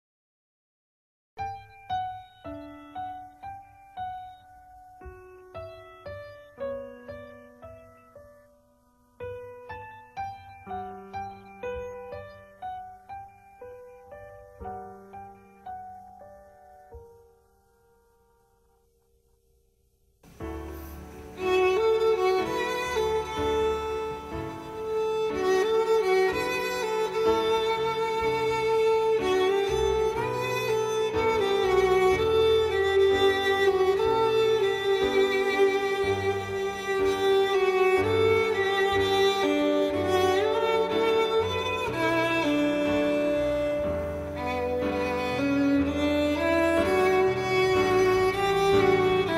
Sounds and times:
Violin, fiddle: 0:20.4 - 0:49.3.

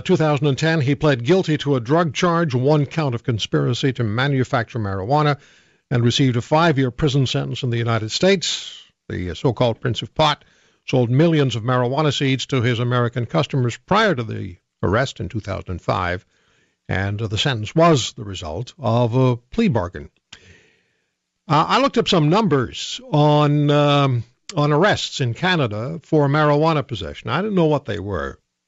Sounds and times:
Speech: 0:00.0 - 0:16.3, 0:16.9 - 0:20.2, 0:21.5 - 0:28.5.

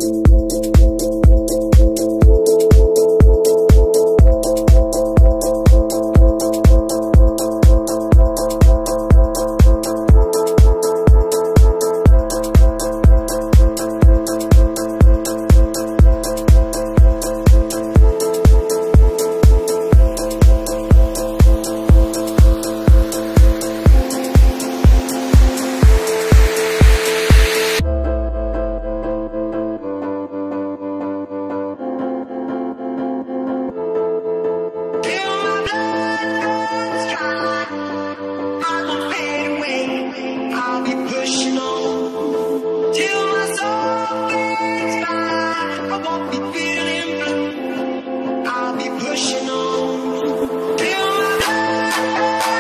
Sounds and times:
Music: 0:00.0 - 0:52.6.

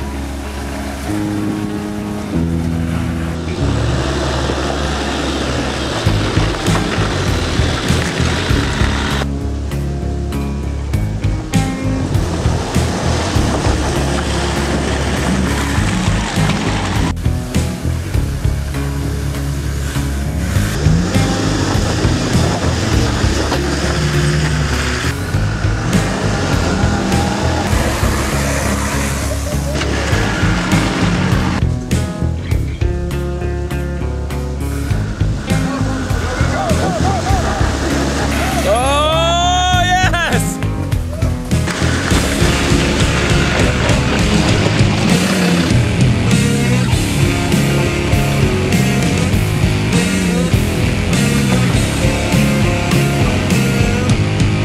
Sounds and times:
Car: 0:00.0 - 0:54.6
Music: 0:00.0 - 0:54.6.

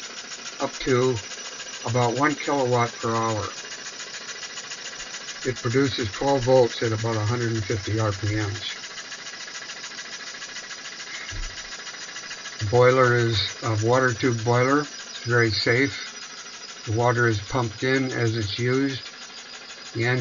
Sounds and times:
Speech: 0:00.6 - 0:01.2, 0:01.9 - 0:03.5, 0:05.5 - 0:08.8, 0:12.6 - 0:16.1, 0:16.9 - 0:19.0, 0:20.0 - 0:20.2.

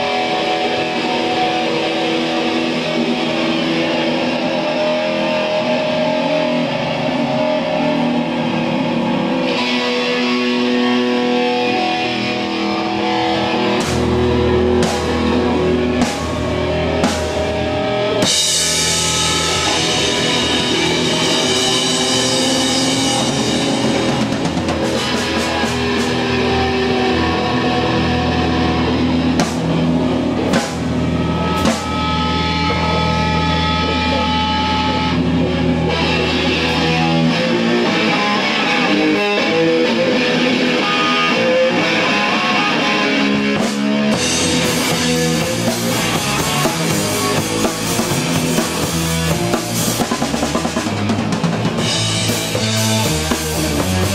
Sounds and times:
Music: 0:00.0 - 0:54.1.

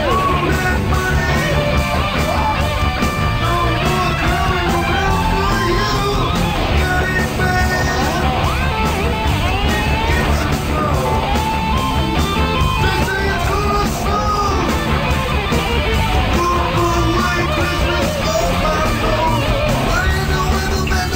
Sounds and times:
Music: 0:00.0 - 0:21.1.

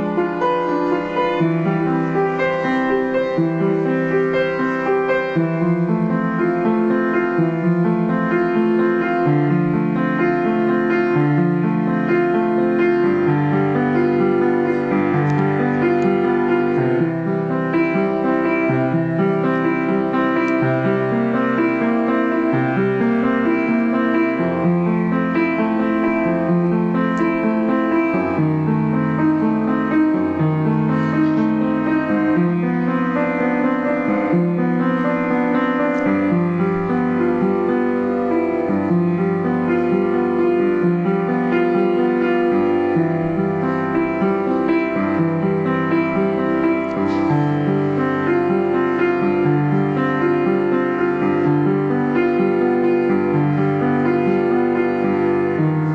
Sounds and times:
Piano: 0:00.0 - 0:55.9.

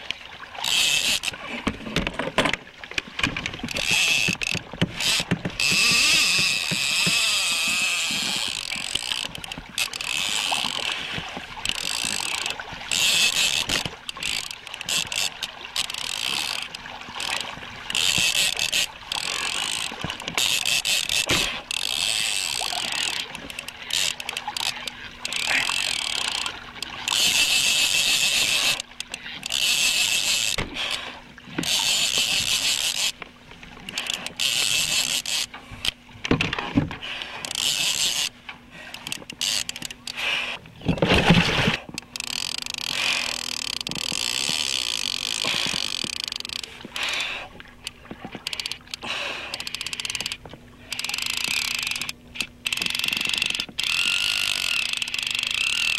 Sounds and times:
Rowboat, canoe, kayak: 0:00.0 - 0:55.9.

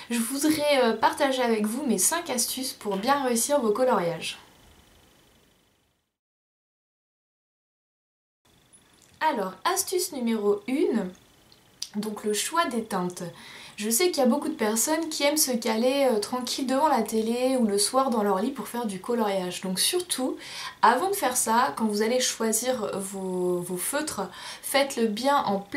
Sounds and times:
Speech: 0:00.0 - 0:04.5, 0:09.2 - 0:11.2, 0:11.8 - 0:25.7.

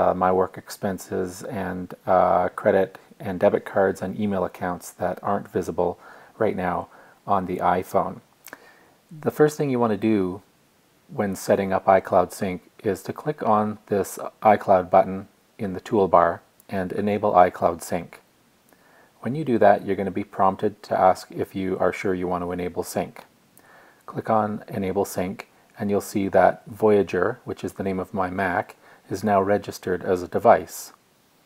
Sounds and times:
Speech: 0:00.0 - 0:10.5, 0:11.1 - 0:18.3, 0:19.2 - 0:23.3, 0:24.1 - 0:31.0.

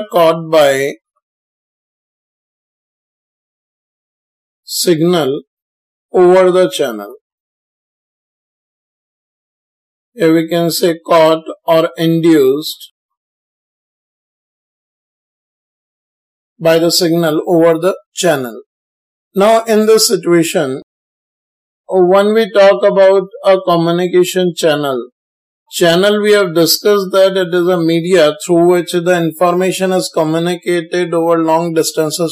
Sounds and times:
Speech: 0:00.0 - 0:01.0, 0:04.7 - 0:05.5, 0:06.2 - 0:07.2, 0:10.2 - 0:12.9, 0:16.6 - 0:18.7, 0:19.4 - 0:20.9, 0:21.9 - 0:25.1, 0:25.7 - 0:32.3.

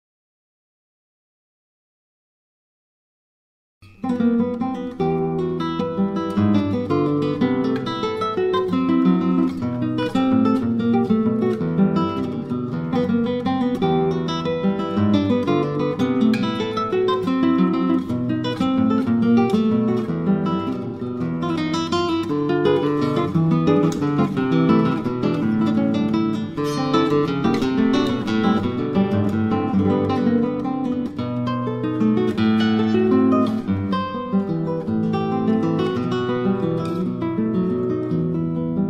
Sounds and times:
Electric guitar: 0:04.1 - 0:38.8.

